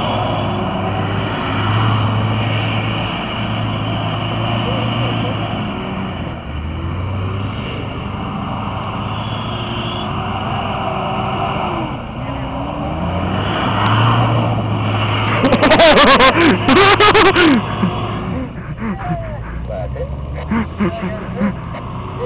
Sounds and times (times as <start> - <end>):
Car passing by: 0.0 - 9.5, 10.1 - 22.2.